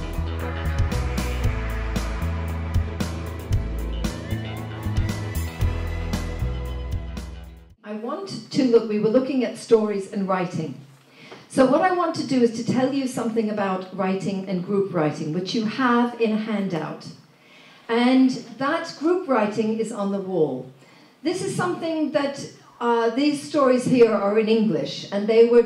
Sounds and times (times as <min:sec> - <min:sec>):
Speech: 0:07.8 - 0:10.8, 0:11.5 - 0:17.2, 0:17.9 - 0:25.6.